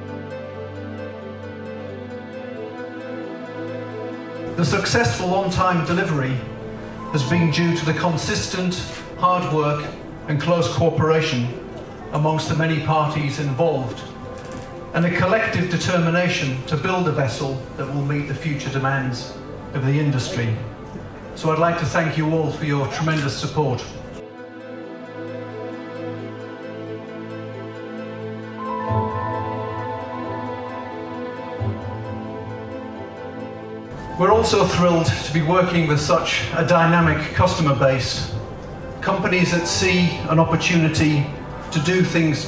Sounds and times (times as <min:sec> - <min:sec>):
Speech: 0:04.5 - 0:06.5, 0:07.1 - 0:14.1, 0:15.0 - 0:20.7, 0:21.4 - 0:24.0, 0:34.2 - 0:38.4, 0:39.0 - 0:42.4.